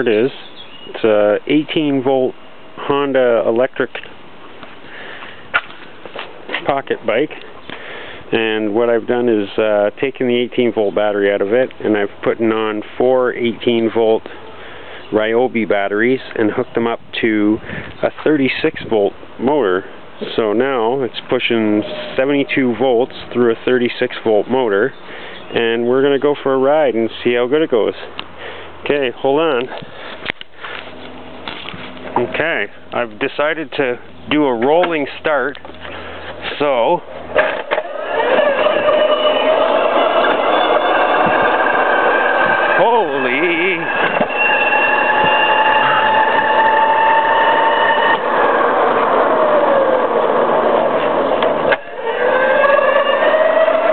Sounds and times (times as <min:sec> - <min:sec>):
Speech: 0:00.0 - 0:04.1, 0:06.6 - 0:07.4, 0:08.3 - 0:14.3, 0:15.1 - 0:28.2, 0:28.8 - 0:29.8, 0:32.2 - 0:35.6, 0:36.4 - 0:37.1, 0:42.8 - 0:43.9.